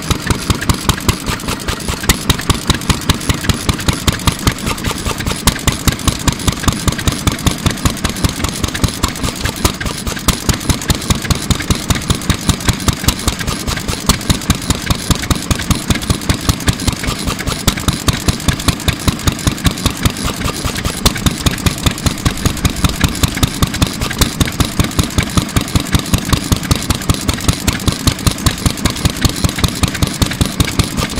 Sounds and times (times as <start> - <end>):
Heavy engine (low frequency): 0.0 - 31.1.